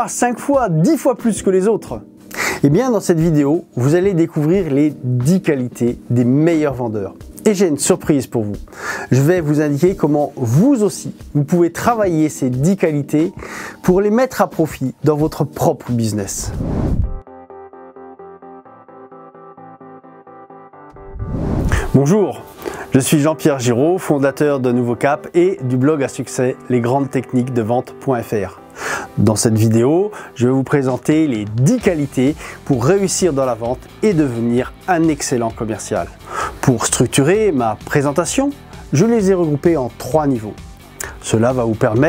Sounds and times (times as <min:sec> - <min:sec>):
Speech: 0:00.0 - 0:16.6, 0:21.9 - 0:28.6, 0:29.2 - 0:42.0
Music: 0:00.0 - 0:42.0.